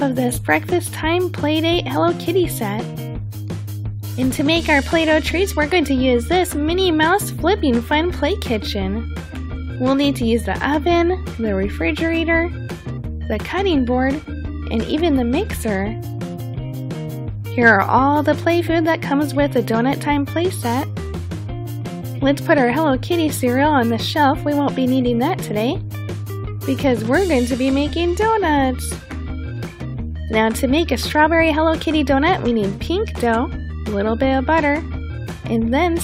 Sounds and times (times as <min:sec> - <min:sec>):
Speech: 0:00.0 - 0:02.9, 0:04.2 - 0:09.1, 0:09.8 - 0:12.6, 0:13.3 - 0:16.0, 0:17.6 - 0:20.9, 0:22.2 - 0:25.8, 0:26.7 - 0:29.0, 0:30.3 - 0:34.8, 0:35.5 - 0:36.0
Music: 0:00.0 - 0:36.0.